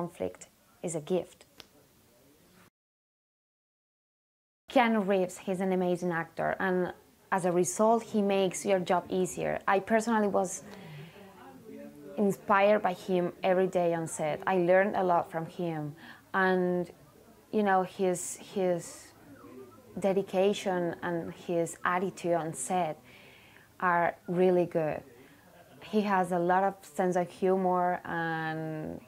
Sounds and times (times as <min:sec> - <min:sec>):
Speech: 0:00.0 - 0:02.5, 0:04.7 - 0:23.2, 0:23.8 - 0:29.0.